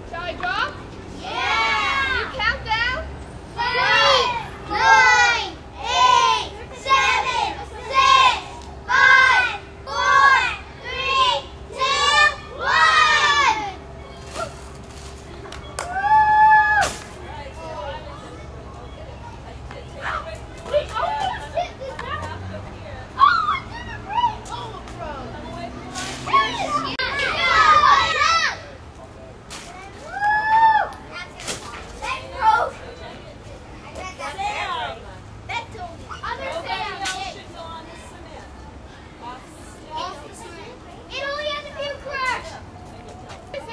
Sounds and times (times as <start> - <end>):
Outside, urban or manmade: 0.0 - 43.7.